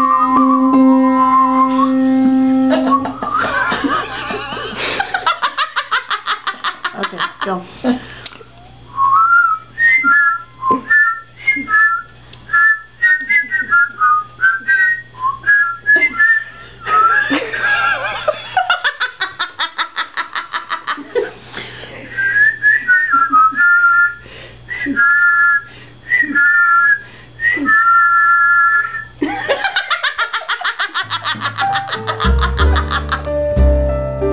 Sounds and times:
Whistling: 0.0s - 3.8s, 8.9s - 17.3s, 22.2s - 29.2s.

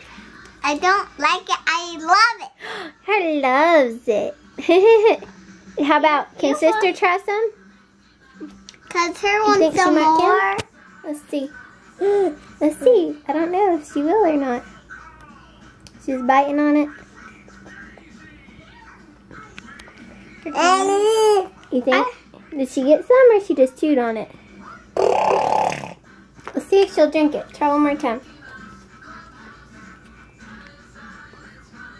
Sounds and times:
Inside, small room: 0.0s - 31.9s
Music: 0.0s - 31.9s
Child speech, kid speaking: 0.6s - 4.3s, 5.8s - 7.5s, 8.8s - 11.5s, 14.1s - 17.0s, 20.5s - 24.3s, 26.6s - 28.2s.

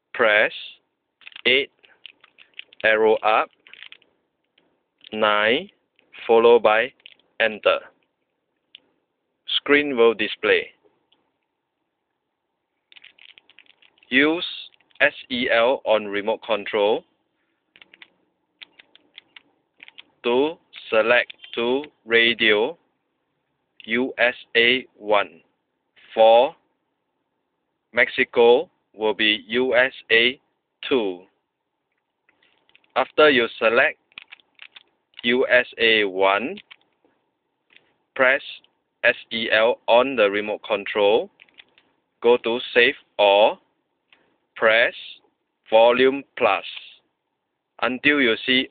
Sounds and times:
Speech: 0.2s - 0.8s, 1.5s - 1.7s, 2.8s - 3.5s, 5.1s - 7.9s, 9.5s - 10.8s, 14.1s - 17.0s, 20.3s - 22.8s, 23.8s - 25.4s, 26.0s - 26.6s, 28.0s - 31.3s, 33.0s - 34.0s, 35.2s - 36.6s, 38.2s - 41.3s, 42.2s - 43.6s, 44.6s - 47.0s, 47.8s - 48.7s.

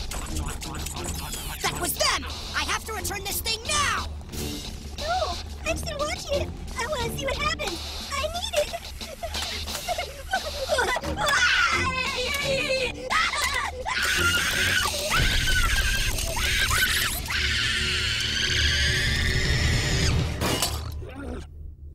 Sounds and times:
Music: 0.0s - 21.9s.

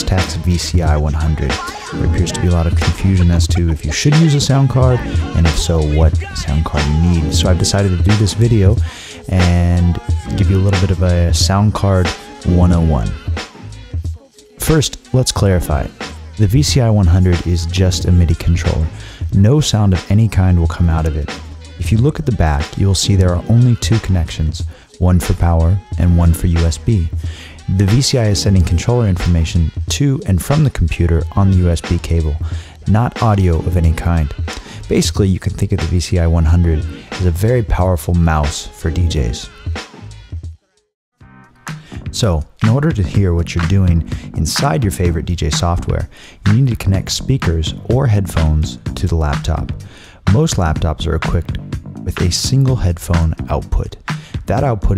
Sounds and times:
Speech: 0.0s - 13.2s, 14.6s - 39.6s, 42.1s - 54.9s
Music: 0.0s - 54.9s.

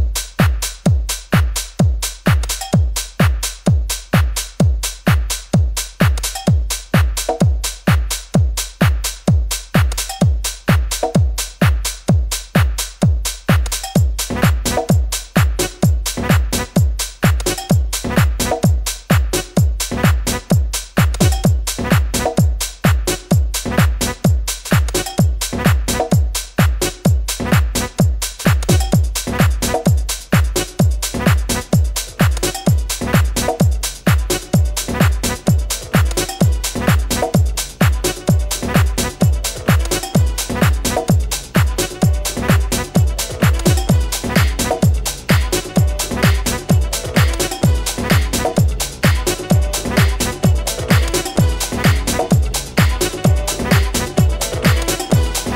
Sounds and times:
Techno: 0.0s - 55.5s.

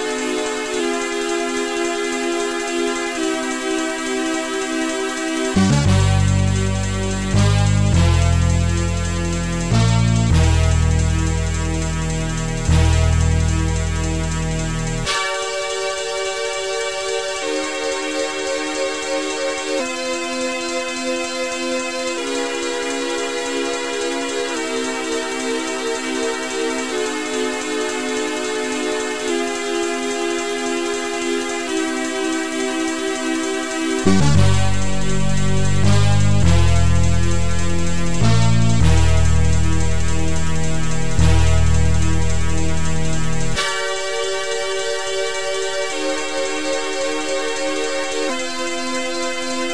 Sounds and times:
Soundtrack music: 0.0s - 49.7s.

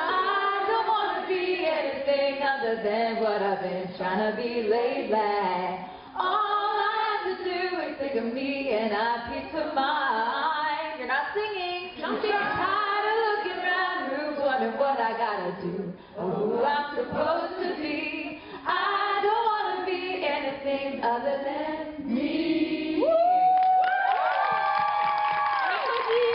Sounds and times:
Female singing: 0.0s - 23.4s.

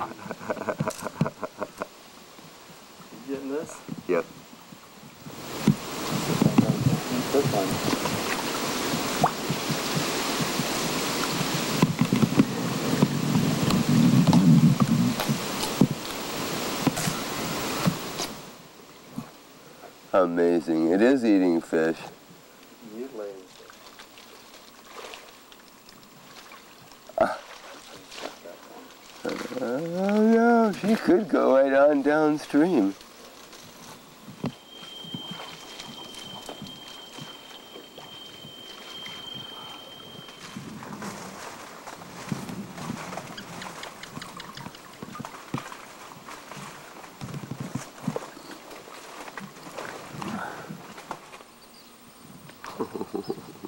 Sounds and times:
Sailboat, sailing ship: 0.0s - 19.9s, 23.4s - 51.6s
Speech: 6.6s - 7.8s, 20.2s - 22.2s, 22.8s - 23.5s, 29.3s - 33.0s.

